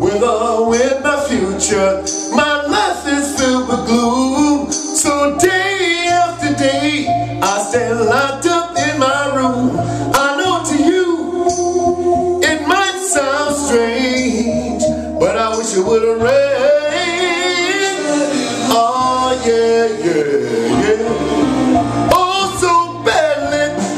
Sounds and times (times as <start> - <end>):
Music: 0.0 - 23.9.